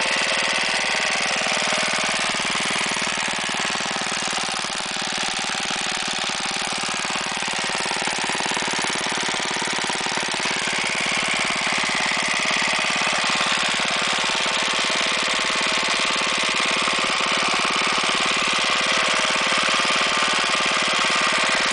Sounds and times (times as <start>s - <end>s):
Engine: 0.0s - 21.7s.